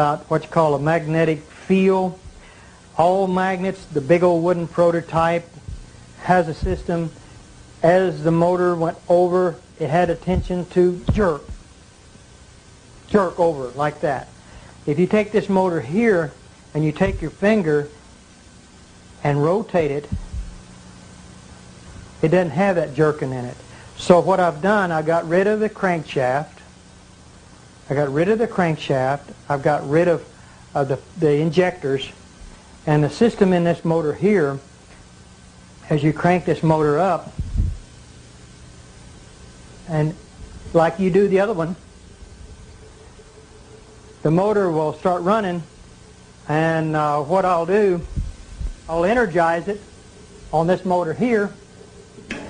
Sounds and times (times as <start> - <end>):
Speech: 0.0 - 2.2, 3.0 - 5.6, 6.2 - 7.2, 7.8 - 11.6, 13.1 - 14.3, 14.9 - 18.0, 19.2 - 20.1, 22.2 - 26.7, 27.9 - 32.2, 32.9 - 34.7, 35.8 - 37.4, 39.9 - 41.8, 44.2 - 45.7, 46.5 - 48.1, 48.9 - 49.8, 50.6 - 51.6.